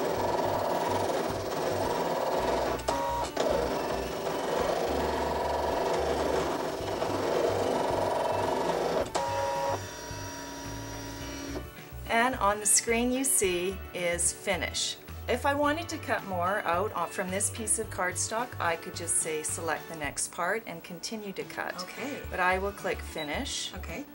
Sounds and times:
Music: 0:00.0 - 0:24.1
Speech: 0:12.1 - 0:24.1.

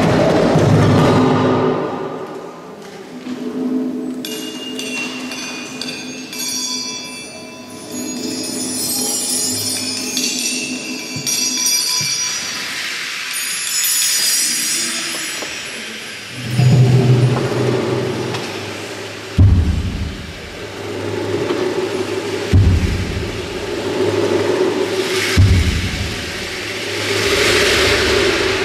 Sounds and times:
Wood block: 0:08.3 - 0:12.8, 0:24.2 - 0:27.7.

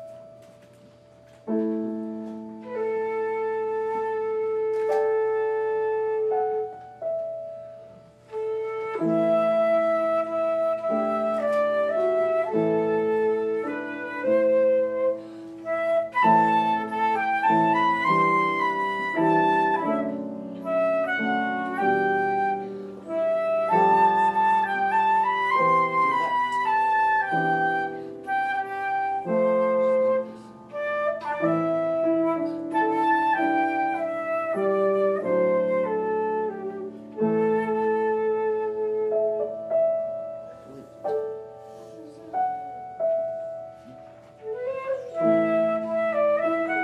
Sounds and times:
Flute: 0:00.0 - 0:46.8.

